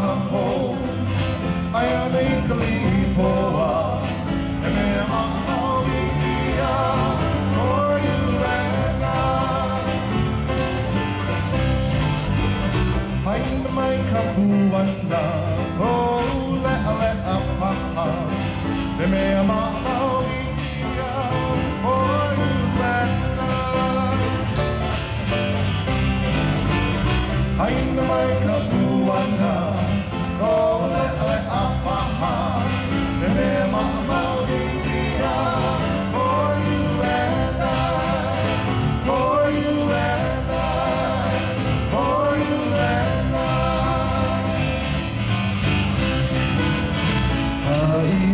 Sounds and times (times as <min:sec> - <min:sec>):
Bluegrass: 0:00.0 - 0:48.3.